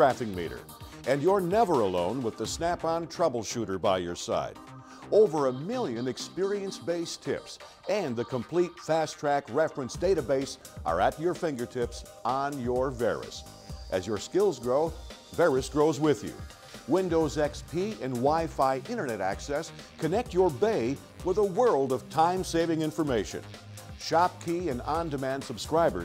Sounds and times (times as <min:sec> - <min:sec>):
Speech: 0:00.0 - 0:23.4, 0:24.0 - 0:26.0
Music: 0:00.0 - 0:26.0.